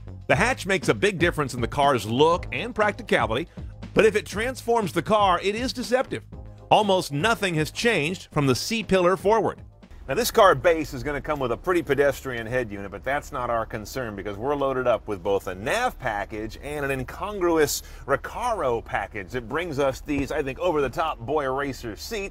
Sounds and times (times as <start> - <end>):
Music: 0.0 - 22.3
Speech: 0.3 - 22.3.